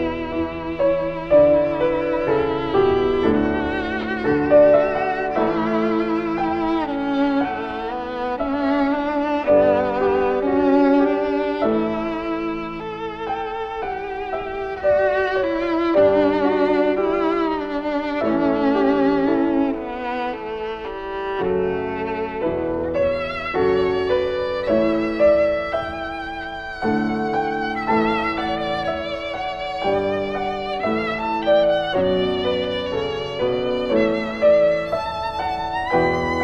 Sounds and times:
Violin, fiddle: 0:00.0 - 0:36.4.

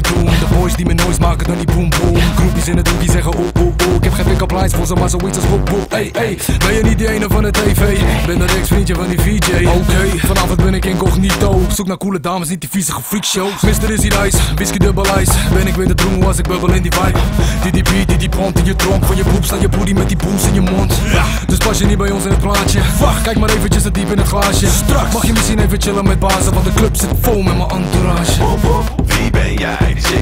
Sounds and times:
Music: 0:00.0 - 0:11.8, 0:13.5 - 0:30.2.

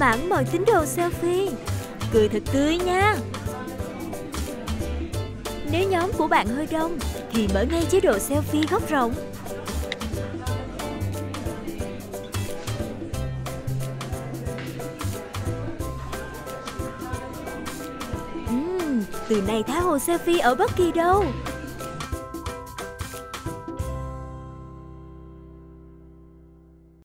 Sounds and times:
Speech: 0:00.0 - 0:03.2, 0:05.7 - 0:09.2, 0:18.5 - 0:21.4
Music: 0:00.0 - 0:27.0.

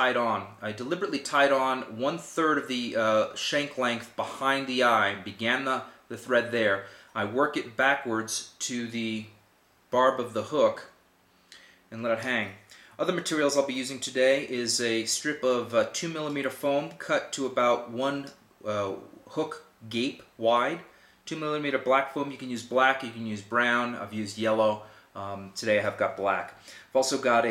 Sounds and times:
Speech: 0:00.0 - 0:11.0, 0:11.9 - 0:27.5.

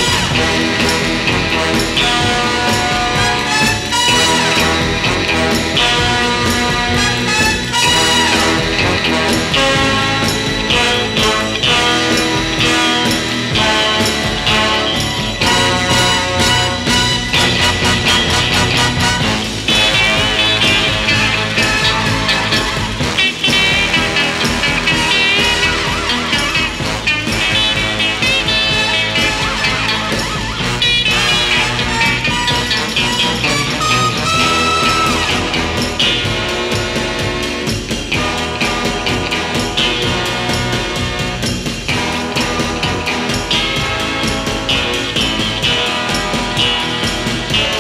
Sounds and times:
Background music: 0:00.0 - 0:47.8.

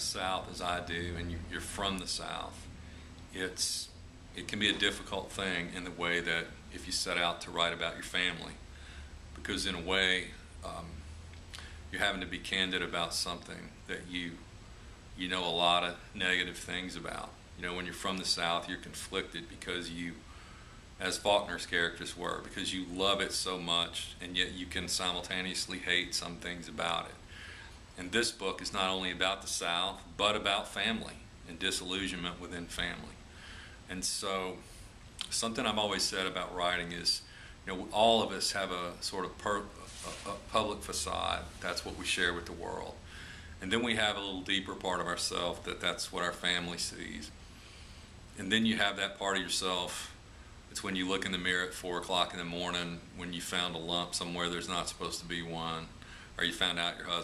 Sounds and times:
Speech: 0:00.0 - 0:02.7, 0:03.3 - 0:08.6, 0:09.4 - 0:11.0, 0:11.9 - 0:14.5, 0:15.2 - 0:20.2, 0:21.0 - 0:27.2, 0:28.0 - 0:33.2, 0:33.9 - 0:43.0, 0:43.6 - 0:47.4, 0:48.4 - 0:57.2.

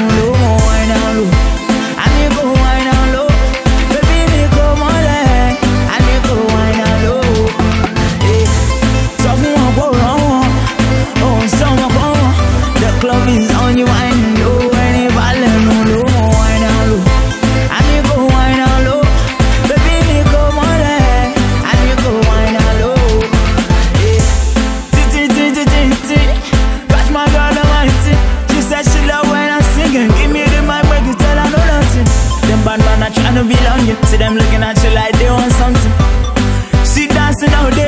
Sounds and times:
Music: 0:00.0 - 0:37.8.

